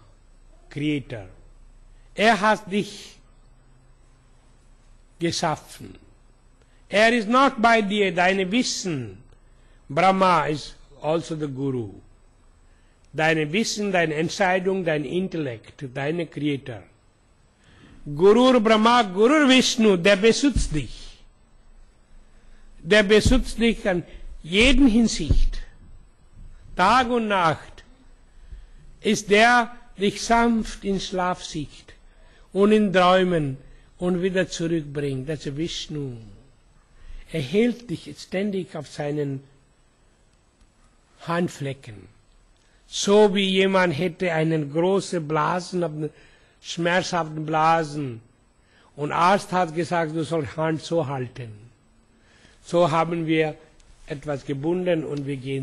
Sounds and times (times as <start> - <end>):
Speech: 0.6 - 1.4, 2.2 - 3.2, 5.2 - 6.1, 6.9 - 9.3, 9.9 - 12.1, 13.2 - 16.9, 18.1 - 21.2, 22.8 - 25.7, 26.8 - 27.9, 29.0 - 32.0, 32.6 - 36.4, 37.3 - 39.6, 41.2 - 42.2, 42.9 - 48.3, 49.0 - 51.8, 52.6 - 55.6.